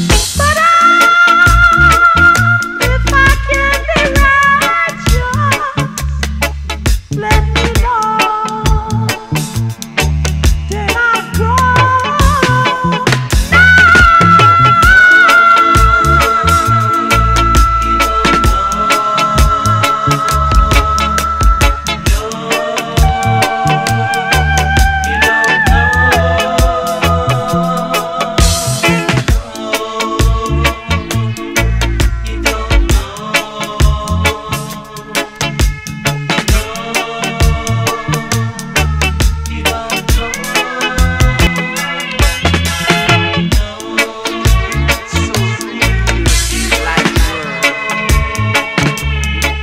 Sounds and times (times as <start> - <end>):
Afrobeat: 0.0 - 49.6
Reggae: 0.0 - 49.6.